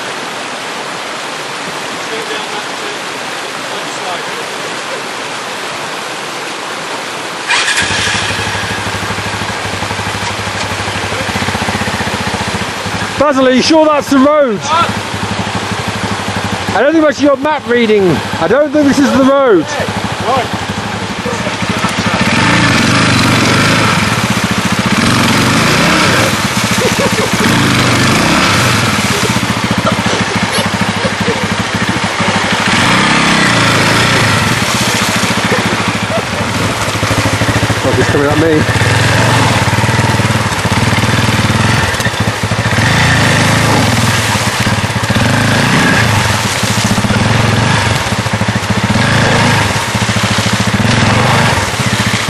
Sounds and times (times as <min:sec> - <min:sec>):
Speech: 0:02.0 - 0:03.0, 0:03.7 - 0:05.1, 0:13.2 - 0:15.0, 0:16.7 - 0:20.5, 0:37.8 - 0:38.7.